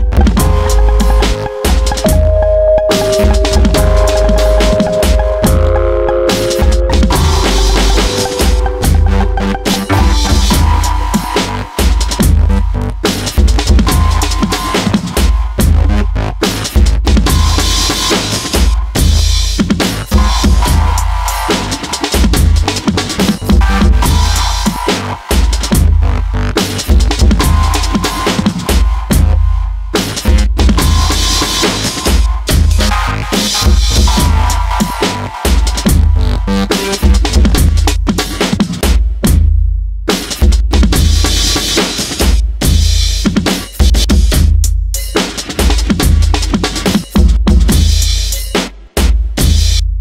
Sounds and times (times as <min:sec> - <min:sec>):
Drum and bass: 0:00.0 - 0:50.0.